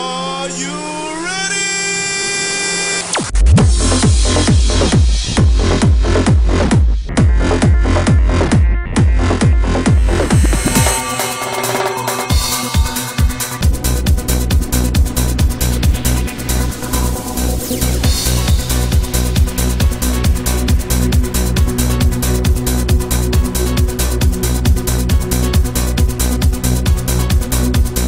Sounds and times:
Trance music: 3.0 - 28.0.

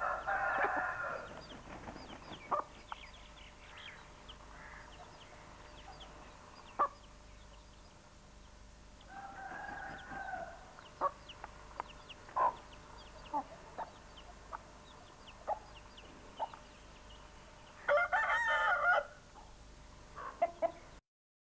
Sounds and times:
Chicken, rooster: 0.0 - 2.9, 6.7 - 7.0, 9.1 - 11.4, 12.3 - 15.8, 17.8 - 19.6, 20.2 - 21.0
Bird: 0.0 - 18.0.

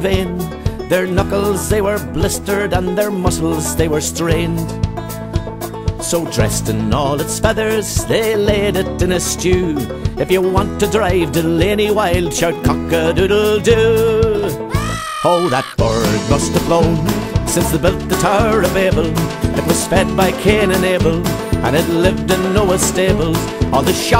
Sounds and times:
Music: 0.0 - 24.1.

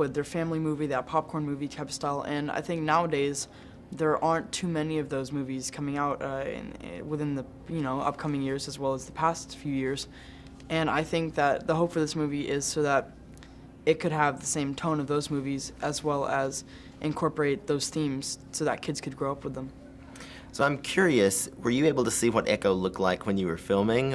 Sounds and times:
Speech: 0.0 - 10.1, 13.9 - 19.8, 20.6 - 24.1.

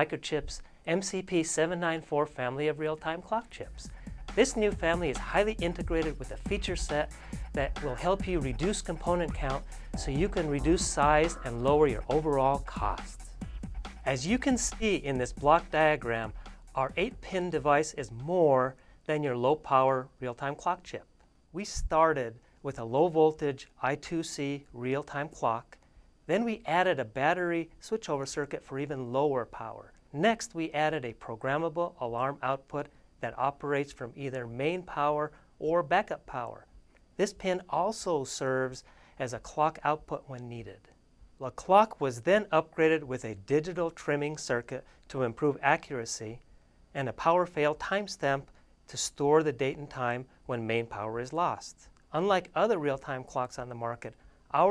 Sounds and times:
Speech: 0.0 - 13.2, 14.1 - 46.4, 47.0 - 54.7
Music: 3.5 - 18.2.

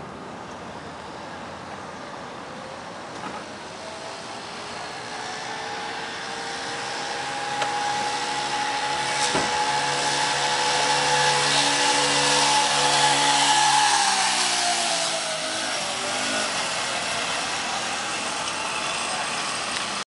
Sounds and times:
Ratchet, pawl: 4.3 - 20.0.

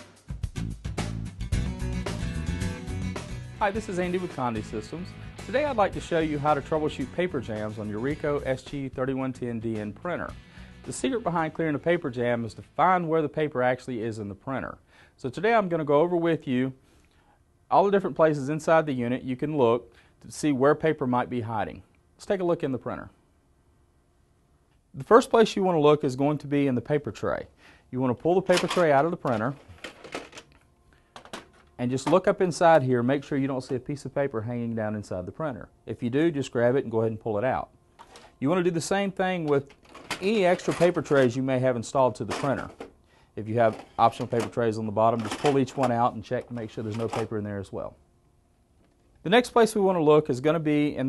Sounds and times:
Speech: 3.6 - 10.3, 10.9 - 16.8, 17.7 - 23.2, 25.0 - 29.6, 31.8 - 37.7, 38.4 - 42.8, 43.4 - 48.0, 49.2 - 51.0.

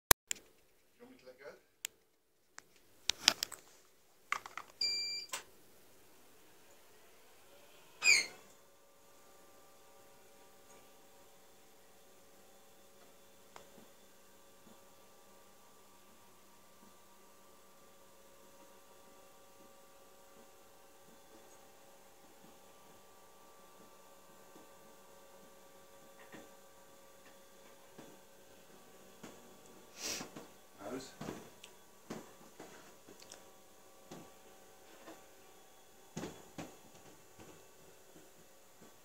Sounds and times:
Speech: 1.0 - 1.7, 30.8 - 31.3.

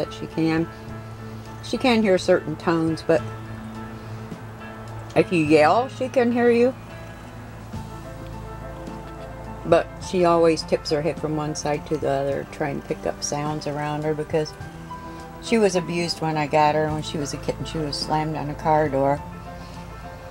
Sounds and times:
Speech: 0.0 - 0.7, 1.7 - 3.2, 5.2 - 6.8, 9.7 - 14.5, 15.4 - 19.2
Music: 0.0 - 20.3.

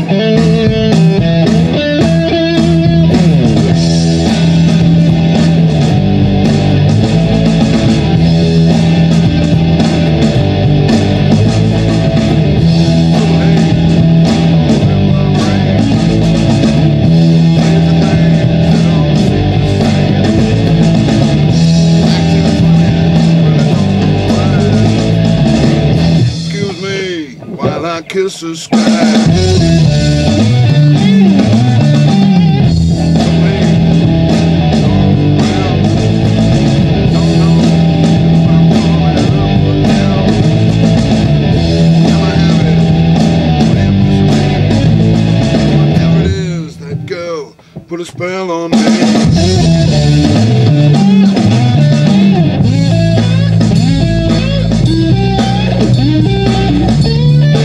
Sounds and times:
Blues: 0.0 - 57.6
Rhythm and blues: 0.0 - 57.6.

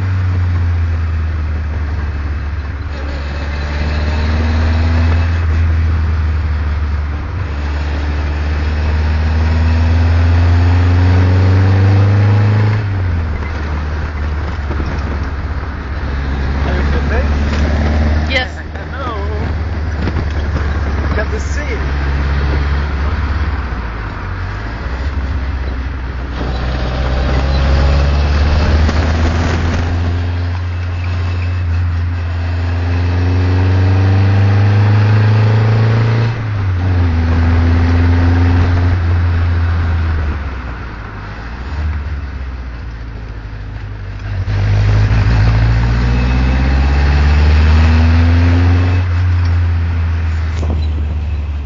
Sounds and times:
Car: 0.0 - 51.6.

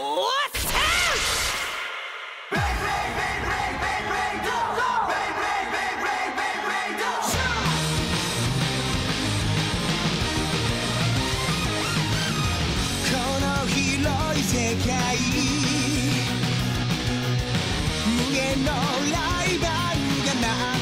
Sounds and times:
Music: 2.4 - 20.8.

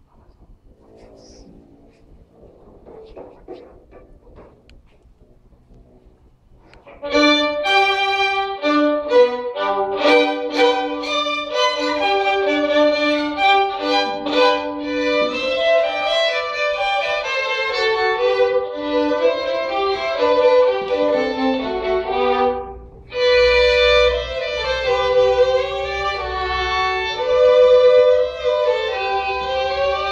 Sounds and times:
Violin, fiddle: 6.7 - 30.1.

